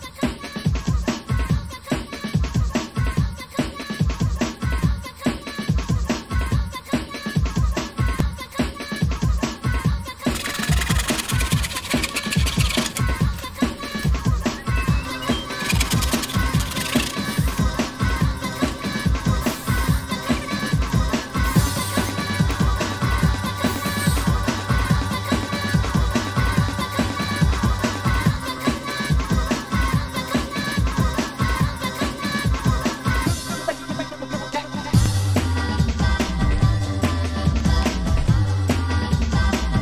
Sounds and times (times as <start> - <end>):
Scratching (performance technique): 10.0 - 24.3.